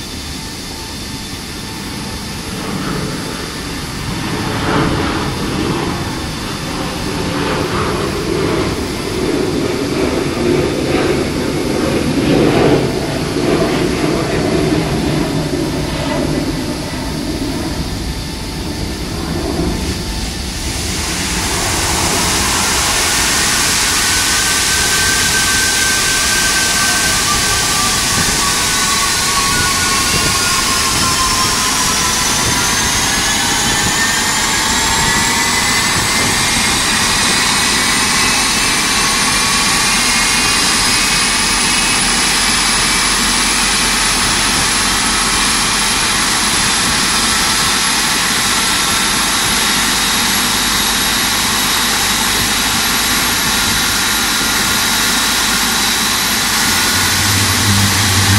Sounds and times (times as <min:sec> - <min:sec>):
Jet engine: 0:00.0 - 0:58.3.